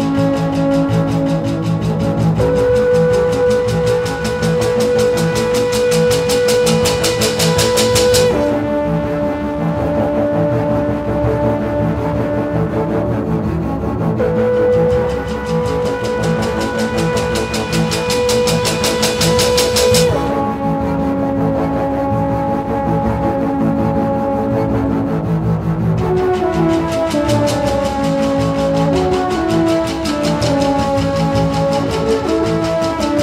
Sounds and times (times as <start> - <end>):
Theme music: 0.0 - 33.2.